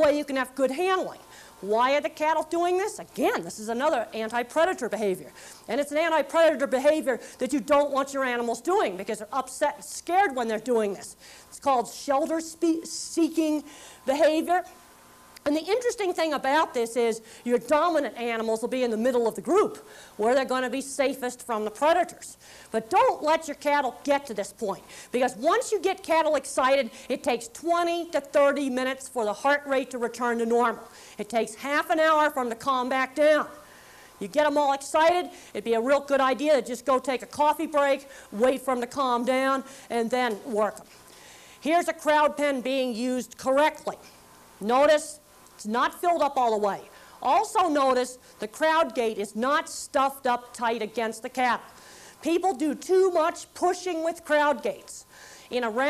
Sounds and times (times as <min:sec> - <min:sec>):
Speech: 0:00.0 - 0:14.8, 0:15.4 - 0:33.6, 0:34.2 - 0:40.9, 0:41.6 - 0:44.0, 0:44.6 - 0:55.8.